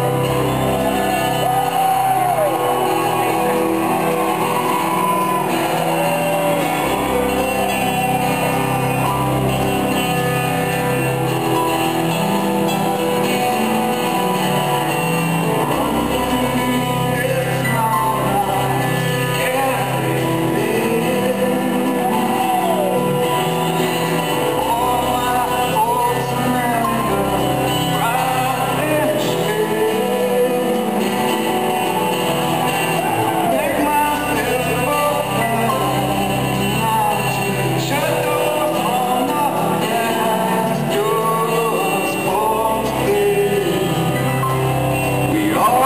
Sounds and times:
Music: 0:00.0 - 0:45.8.

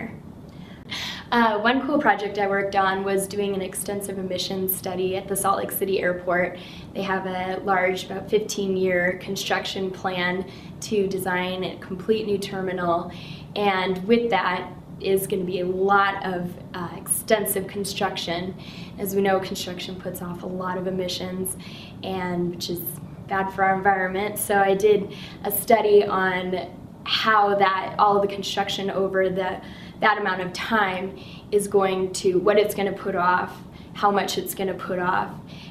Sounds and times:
Female speech, woman speaking: 0:01.2 - 0:35.4.

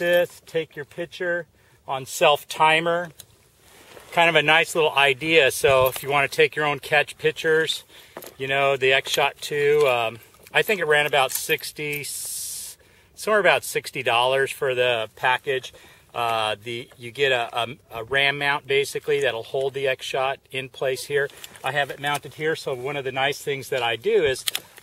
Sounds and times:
Speech: 0:00.0 - 0:03.2, 0:04.1 - 0:07.8, 0:08.4 - 0:24.5.

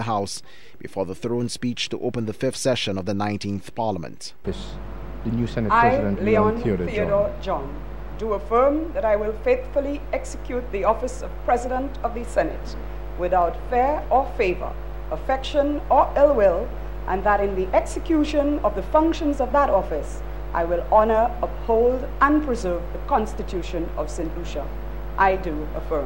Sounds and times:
Narration, monologue: 0:00.0 - 0:26.0
Female speech, woman speaking: 0:05.7 - 0:26.0.

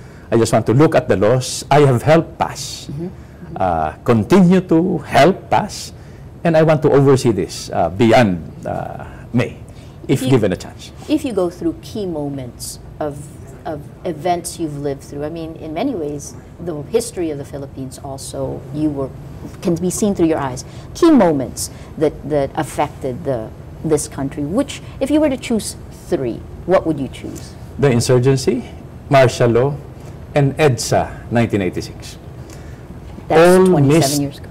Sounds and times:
Speech: 0:10.1 - 0:10.6, 0:33.3 - 0:34.4.

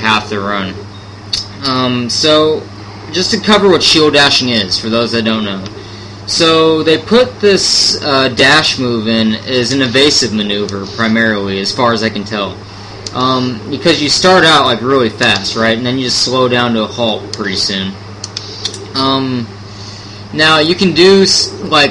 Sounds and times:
Speech: 0:00.0 - 0:00.8, 0:01.4 - 0:18.0, 0:19.0 - 0:19.5, 0:20.3 - 0:21.9.

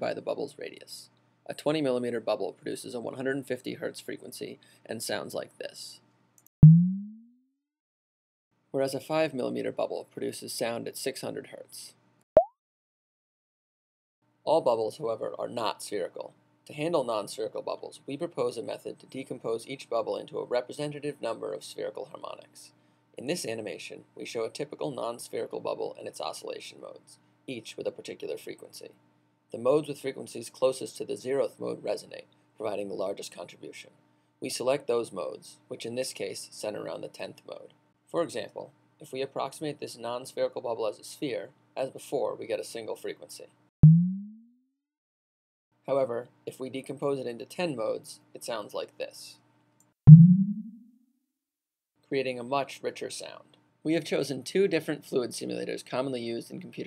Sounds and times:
Speech: 0:00.0 - 0:06.1, 0:08.8 - 0:12.0, 0:14.5 - 0:43.6, 0:45.8 - 0:49.5, 0:52.1 - 0:56.8.

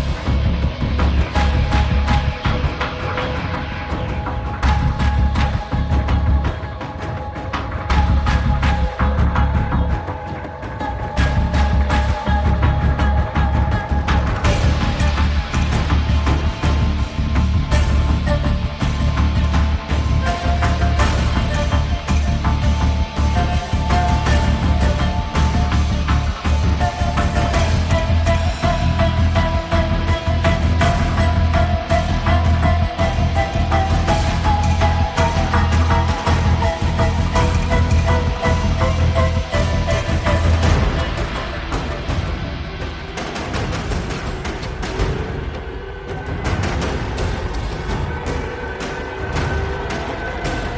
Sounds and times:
Music: 0:00.0 - 0:50.7.

